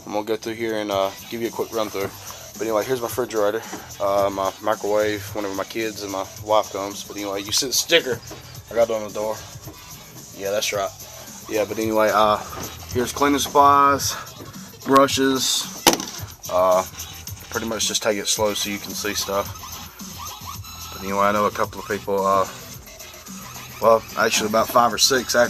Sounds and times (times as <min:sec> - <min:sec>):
Speech: 0:00.0 - 0:09.4, 0:10.4 - 0:15.8, 0:16.5 - 0:16.9, 0:17.5 - 0:19.5, 0:21.0 - 0:22.6, 0:23.8 - 0:25.5
Music: 0:00.0 - 0:25.5.